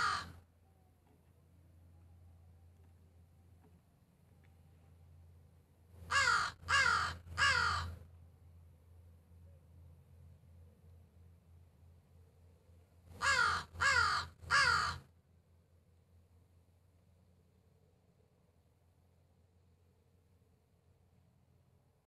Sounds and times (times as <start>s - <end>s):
Caw: 0.0s - 0.4s, 6.1s - 8.0s, 13.2s - 15.1s.